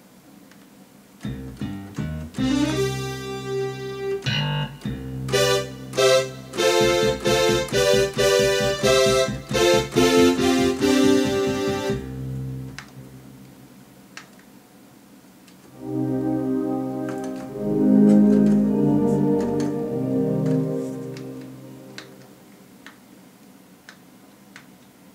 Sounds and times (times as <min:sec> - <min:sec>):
Electric piano: 0:01.9 - 0:13.3, 0:15.8 - 0:22.4.